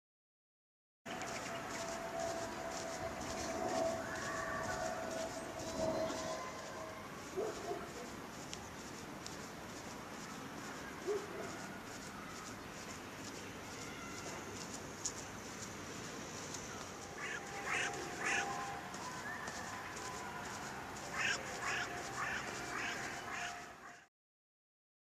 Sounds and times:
Outside, rural or natural: 1.1 - 24.1.

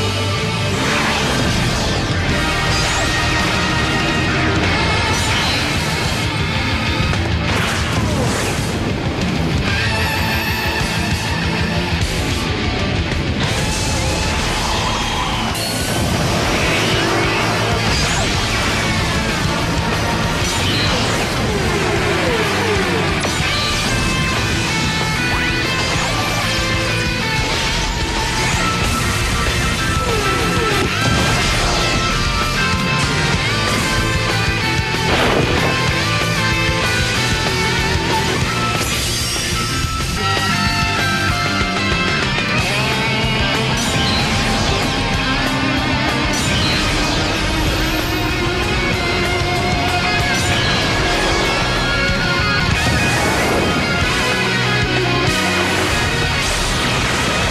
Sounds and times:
Music: 0.0 - 57.5.

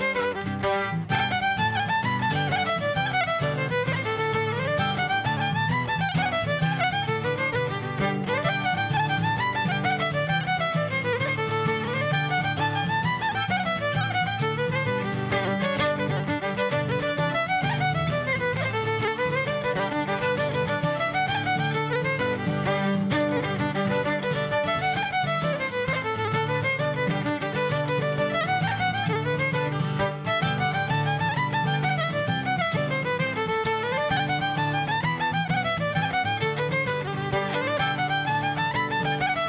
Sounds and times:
Violin, fiddle: 0.0 - 39.4.

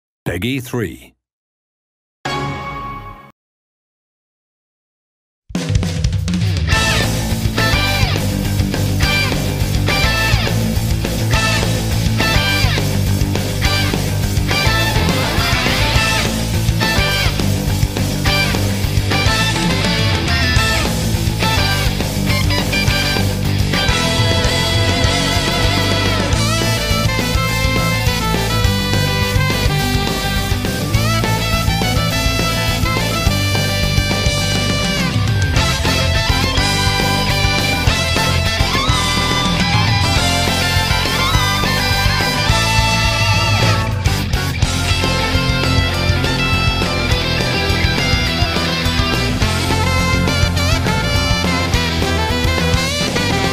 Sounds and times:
Guitar: 6.3 - 53.5.

